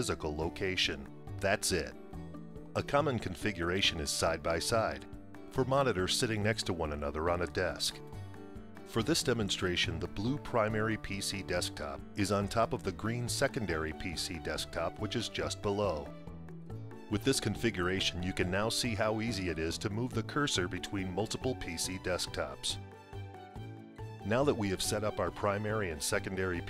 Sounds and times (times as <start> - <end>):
Speech: 0.0 - 2.0, 2.8 - 8.0, 8.9 - 16.1, 17.1 - 22.8, 24.2 - 26.6
Music: 0.0 - 26.6.